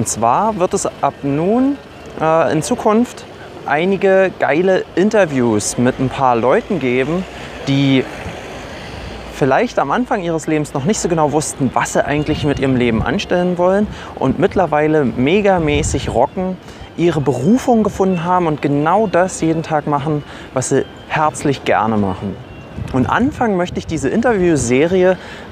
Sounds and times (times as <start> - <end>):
Speech: 0.0 - 8.2, 9.4 - 25.2
Music: 14.5 - 23.2.